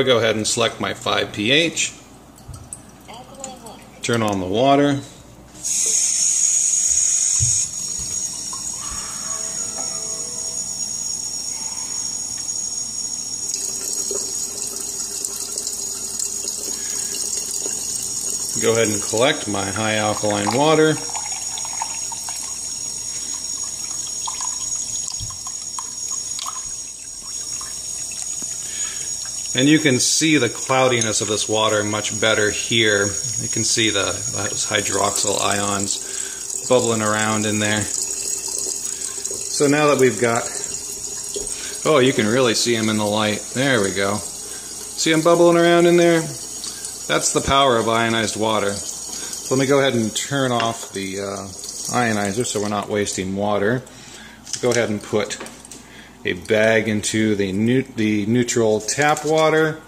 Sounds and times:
Pump (liquid): 5.6 - 59.7
Sink (filling or washing): 5.6 - 59.8
Water: 7.4 - 59.7.

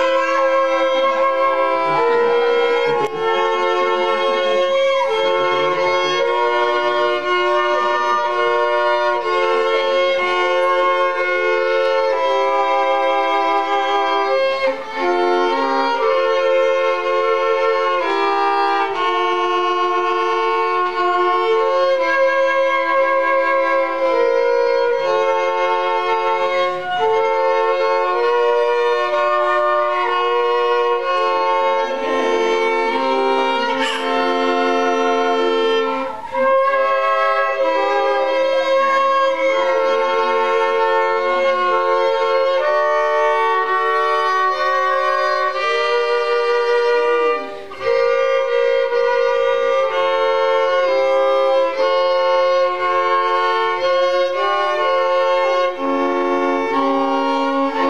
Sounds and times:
Violin, fiddle: 0.0 - 57.8.

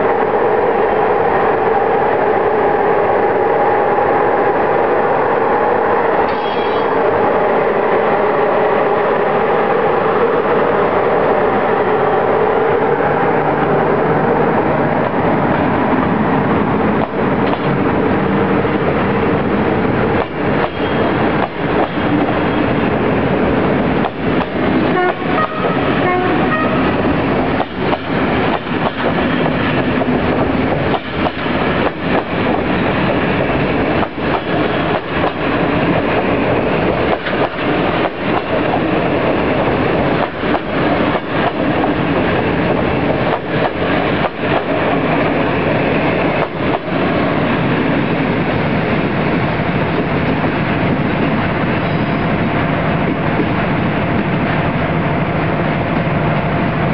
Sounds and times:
Train: 0.0 - 56.9.

